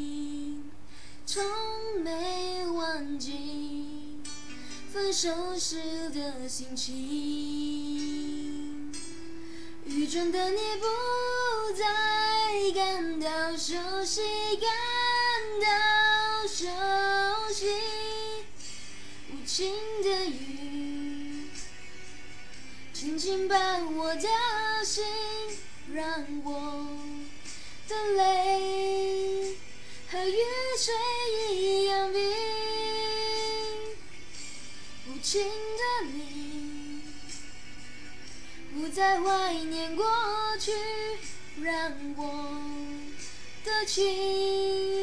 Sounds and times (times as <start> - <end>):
Female singing: 0.0 - 0.7, 1.3 - 4.3, 5.0 - 9.0, 9.9 - 18.5, 19.3 - 21.6, 23.0 - 27.3, 27.9 - 34.0, 35.0 - 37.3, 38.7 - 45.0
Music: 0.0 - 45.0.